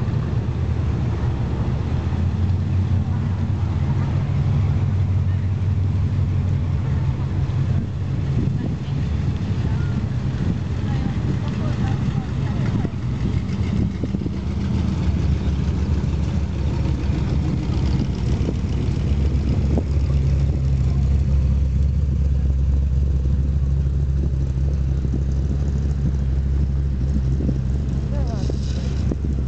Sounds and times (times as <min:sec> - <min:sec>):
Speech: 0:10.8 - 0:13.0, 0:28.0 - 0:29.0
Car passing by: 0:27.1 - 0:29.4.